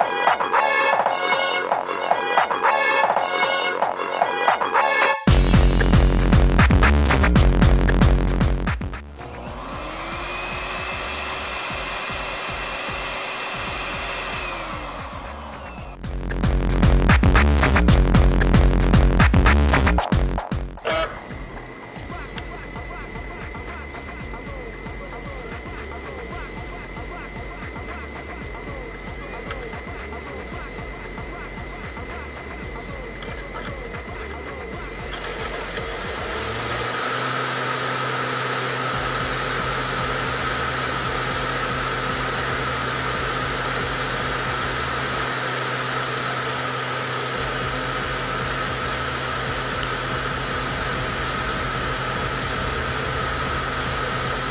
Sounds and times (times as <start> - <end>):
Music: 0.0 - 46.4, 47.3 - 54.5
Cacophony: 22.0 - 37.1.